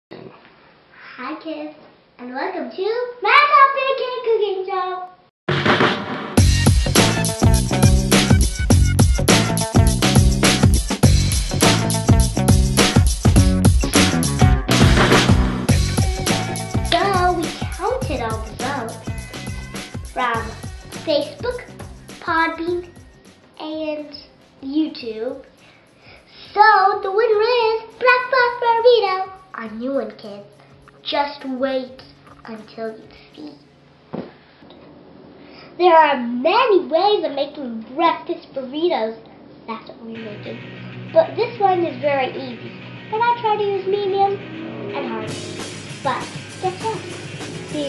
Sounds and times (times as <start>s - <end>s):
Child speech, kid speaking: 1.0s - 5.2s, 16.9s - 19.0s, 20.2s - 22.9s, 23.6s - 25.5s, 26.5s - 33.6s, 35.8s - 45.4s, 46.0s - 47.8s
Music: 5.5s - 34.7s, 40.1s - 47.8s.